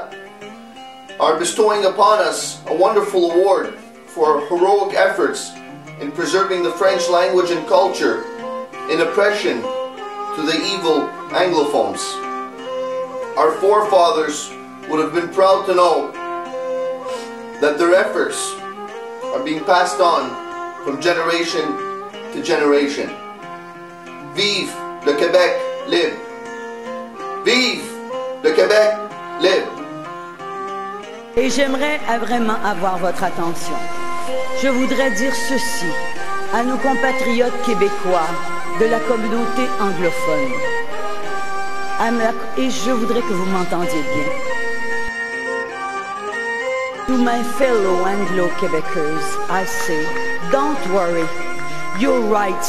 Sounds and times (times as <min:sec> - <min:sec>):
Music: 0:00.0 - 0:52.6
Male speech, man speaking: 0:01.2 - 0:08.3, 0:08.9 - 0:09.7, 0:10.4 - 0:12.2, 0:13.4 - 0:16.1, 0:17.6 - 0:18.6, 0:19.3 - 0:21.8, 0:22.4 - 0:23.2, 0:24.4 - 0:26.2, 0:27.5 - 0:29.8, 0:31.4 - 0:33.8, 0:34.6 - 0:40.6, 0:42.0 - 0:44.3, 0:47.1 - 0:51.3, 0:52.0 - 0:52.6.